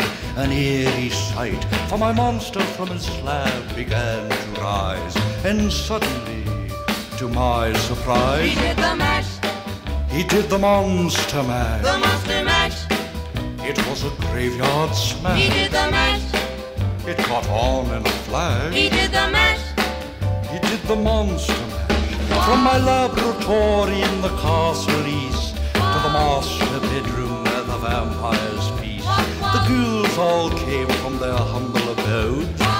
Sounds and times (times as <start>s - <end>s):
Male singing: 0.0s - 9.4s, 10.1s - 12.8s, 13.6s - 16.3s, 17.1s - 19.4s, 20.5s - 32.7s
Music: 0.0s - 32.7s
Female singing: 8.4s - 9.3s, 22.3s - 24.8s, 25.8s - 28.5s, 29.1s - 30.1s.